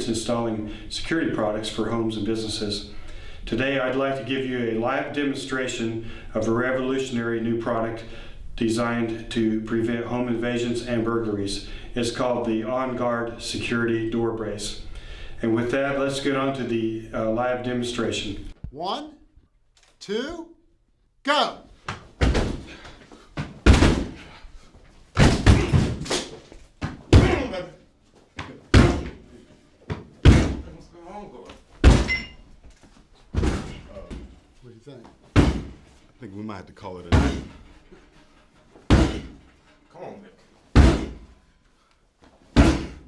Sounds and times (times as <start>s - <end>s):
Speech: 15.4s - 19.2s, 20.0s - 20.6s, 21.2s - 21.7s, 30.6s - 31.6s, 33.9s - 35.1s, 36.2s - 37.5s, 39.9s - 40.4s
Slam: 22.2s - 22.7s, 23.6s - 24.2s, 25.2s - 26.3s, 28.7s - 29.2s, 30.2s - 30.6s, 31.8s - 32.2s, 33.4s - 33.8s, 35.4s - 35.8s, 37.1s - 37.5s, 38.9s - 39.4s, 40.7s - 41.3s, 42.6s - 43.0s.